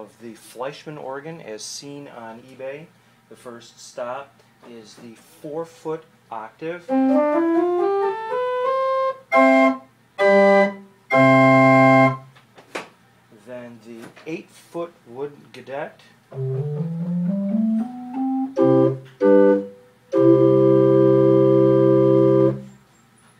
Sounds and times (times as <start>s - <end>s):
Speech: 0.0s - 6.9s, 13.3s - 16.2s
Organ: 6.8s - 12.4s, 16.3s - 23.3s
Piano: 6.9s - 12.2s, 16.3s - 22.9s.